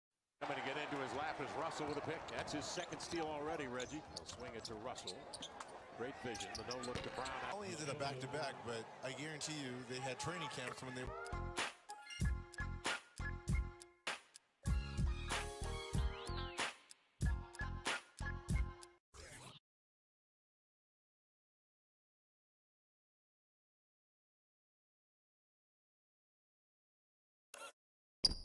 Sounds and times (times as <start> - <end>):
Speech: 0.4 - 11.2.